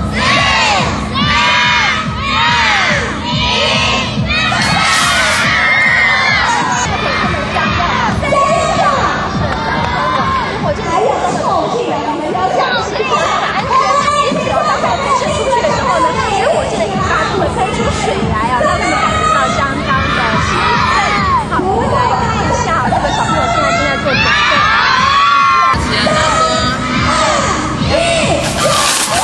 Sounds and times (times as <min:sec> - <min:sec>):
Music: 0:00.0 - 0:29.2
Speech: 0:06.9 - 0:28.8.